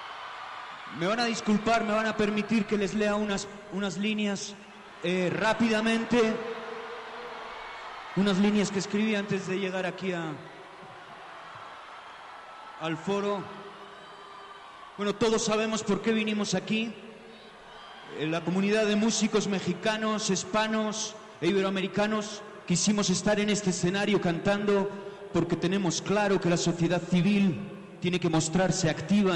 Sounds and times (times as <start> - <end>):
Male speech, man speaking: 0.9 - 6.4, 8.2 - 10.4, 12.8 - 13.5, 15.0 - 17.0, 18.1 - 29.3
Narration, monologue: 0.9 - 6.9, 8.2 - 10.5, 12.8 - 13.6, 15.0 - 17.3, 18.1 - 29.3.